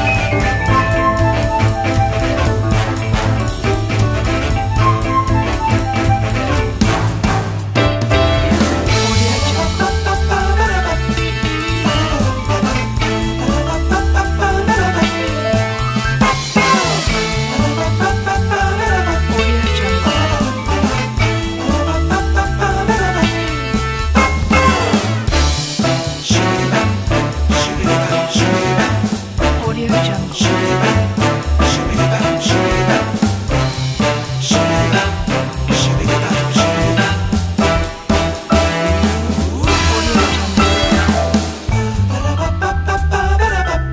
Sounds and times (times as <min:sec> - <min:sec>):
Swing music: 0:00.0 - 0:43.9.